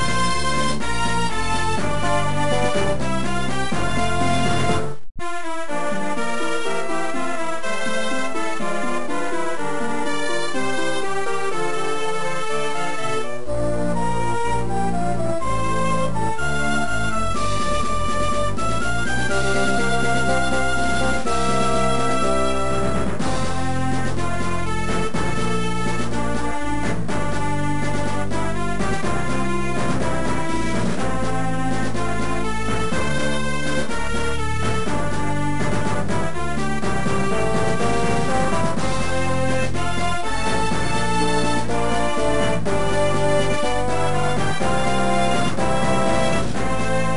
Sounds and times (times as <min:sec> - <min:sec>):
Theme music: 0:00.0 - 0:47.1.